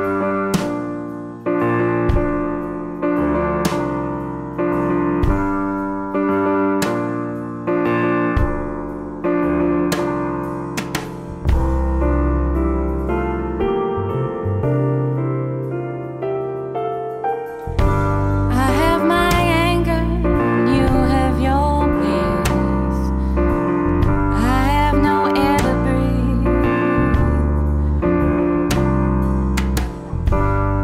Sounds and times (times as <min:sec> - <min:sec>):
Soul music: 0:00.0 - 0:30.8.